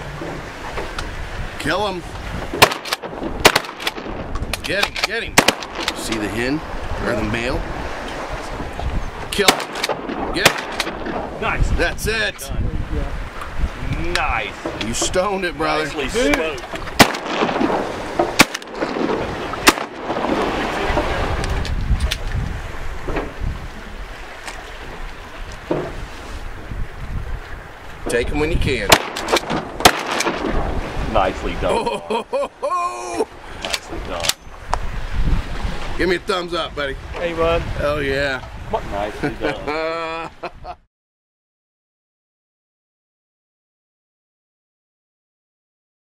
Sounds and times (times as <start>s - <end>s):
Wind noise (microphone): 0.0s - 24.2s, 24.9s - 32.0s, 33.3s - 40.8s
Waves, surf: 0.0s - 40.8s.